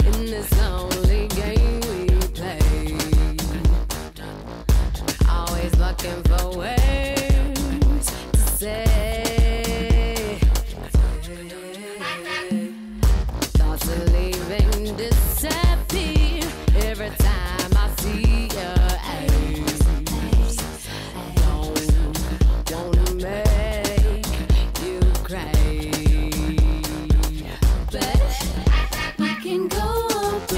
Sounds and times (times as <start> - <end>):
Dance music: 0.0 - 30.5.